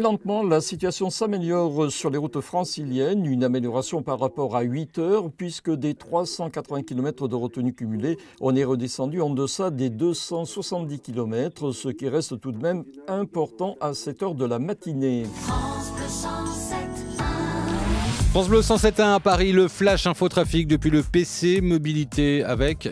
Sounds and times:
Speech: 0.0 - 15.3, 18.3 - 22.9
Radio: 0.0 - 15.4.

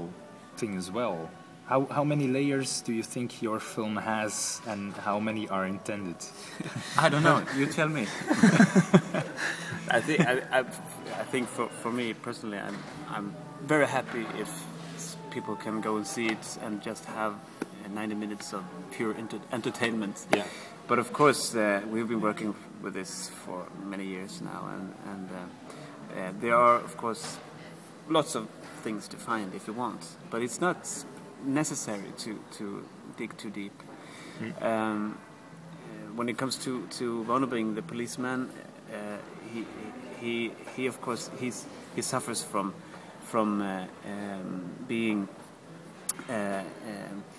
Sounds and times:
Male speech, man speaking: 0.0 - 8.3, 9.9 - 27.4, 28.1 - 33.8, 34.4 - 35.2, 35.9 - 45.4, 46.1 - 47.3.

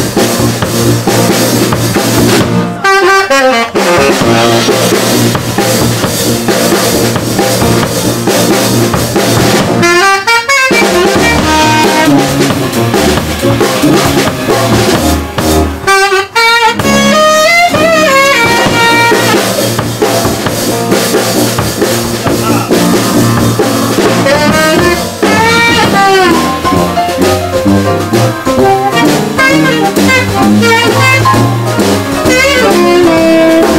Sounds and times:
Funk: 0.0 - 33.7
Exciting music: 10.8 - 16.1, 16.8 - 33.7.

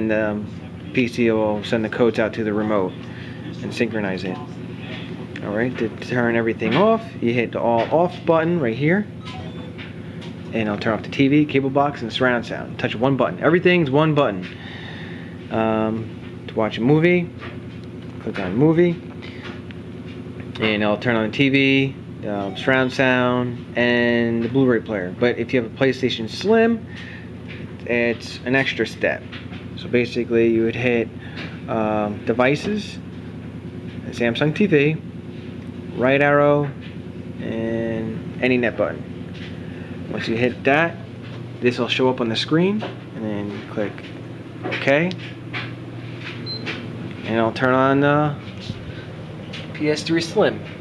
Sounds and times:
Speech: 0.0 - 9.1, 10.5 - 14.5, 15.5 - 17.4, 18.2 - 19.0, 20.6 - 26.8, 27.8 - 31.1, 31.7 - 33.0, 34.0 - 35.0, 35.9 - 36.8, 37.4 - 39.1, 40.1 - 41.0, 41.6 - 44.0, 44.7 - 45.2, 47.2 - 48.4, 49.7 - 50.6.

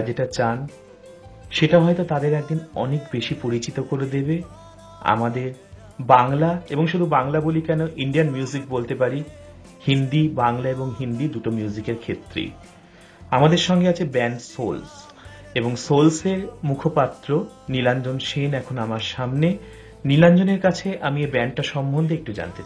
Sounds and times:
Speech: 0.0 - 0.8, 1.5 - 12.6, 13.3 - 22.6
Music: 0.0 - 22.6.

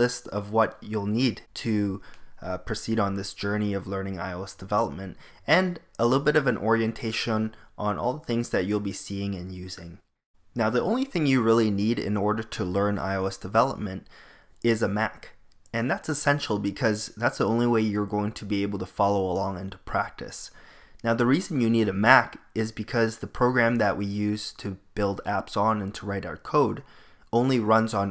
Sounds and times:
Speech: 0.0 - 10.0, 10.6 - 28.1.

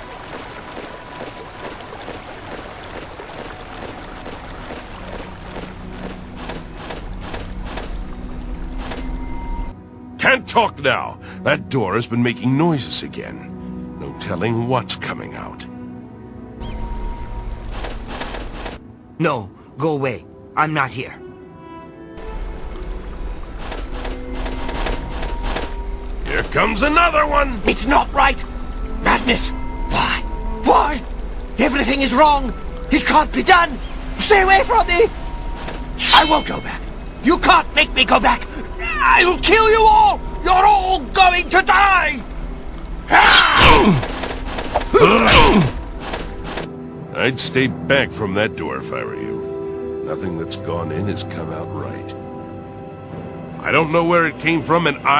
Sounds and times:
Music: 0.0 - 55.1
Speech: 10.2 - 15.7, 50.1 - 52.2, 53.6 - 55.1.

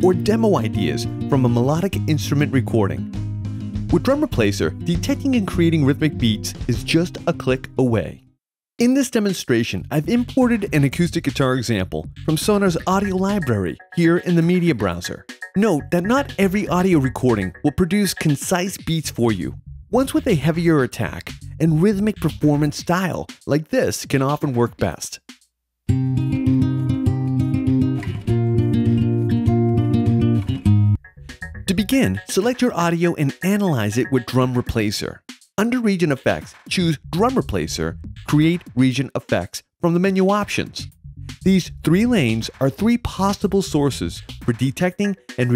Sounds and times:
Speech: 0.0 - 3.1, 3.9 - 8.2, 8.8 - 25.2, 31.7 - 45.5
Music: 0.0 - 8.4, 9.2 - 45.5.

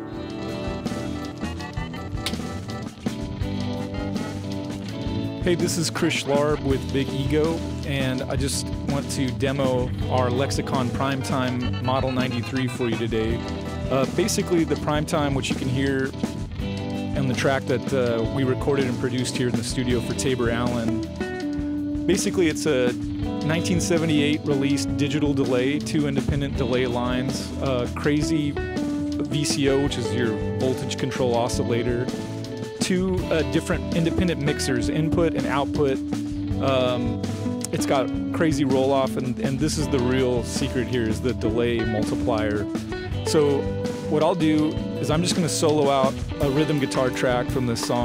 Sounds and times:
Music: 0.0 - 48.0
Speech: 5.4 - 16.2, 17.2 - 21.0, 22.1 - 28.6, 29.2 - 32.1, 32.8 - 36.0, 36.6 - 48.0.

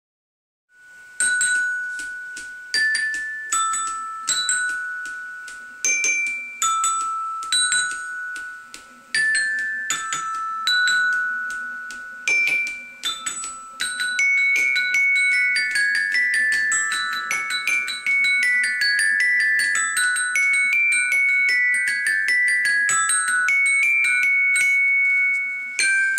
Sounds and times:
Marimba, xylophone: 0.8 - 26.1.

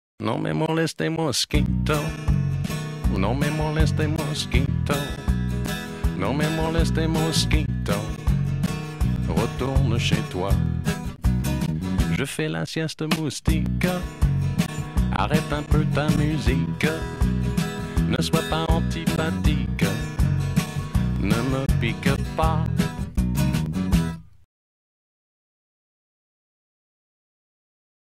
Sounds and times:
Music: 1.5 - 12.5, 13.1 - 24.5.

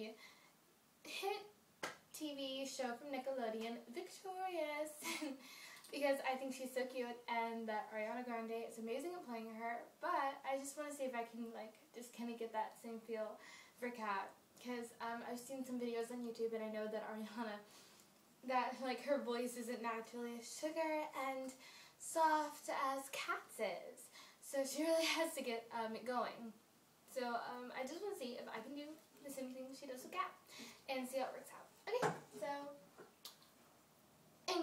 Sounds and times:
Speech: 0.0 - 0.2, 1.0 - 1.5, 2.1 - 17.7, 18.4 - 32.8.

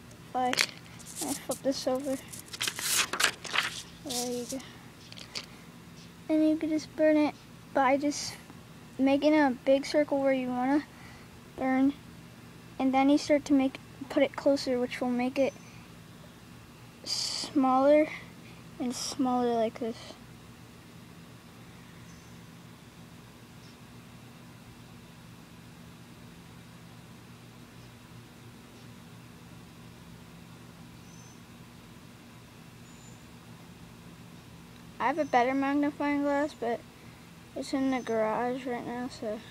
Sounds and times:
Speech: 0.4 - 0.6, 1.2 - 2.2, 4.1 - 4.7, 6.3 - 8.4, 9.0 - 10.9, 11.6 - 12.0, 12.8 - 15.5, 17.1 - 18.2, 18.8 - 20.2, 35.0 - 36.8, 37.6 - 39.5.

